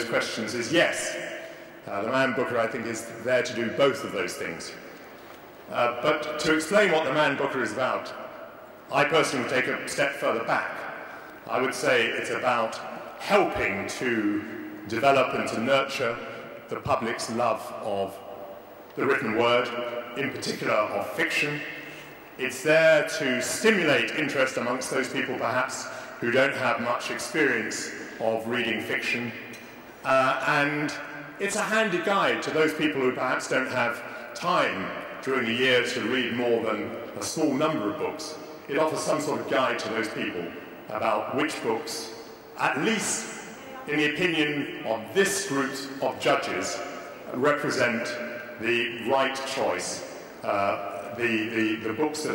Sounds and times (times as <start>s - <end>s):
Male speech, man speaking: 0.0s - 1.3s, 1.9s - 4.8s, 5.7s - 8.2s, 8.9s - 10.8s, 11.5s - 18.3s, 19.0s - 21.7s, 22.4s - 29.4s, 30.0s - 52.3s
Narration, monologue: 0.0s - 52.3s.